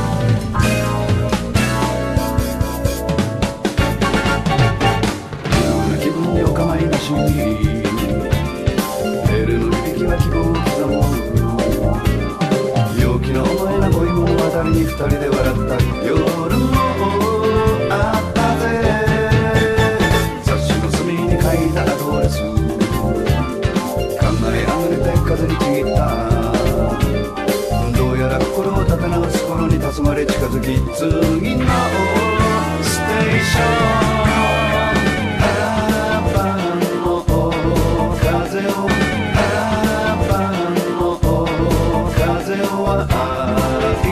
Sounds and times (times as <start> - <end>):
Music: 0.0 - 44.1.